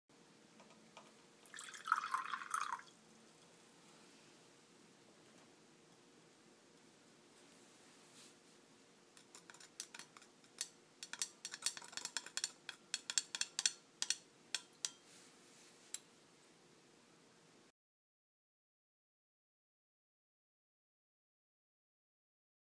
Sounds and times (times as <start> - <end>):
Water: 1.4 - 3.5.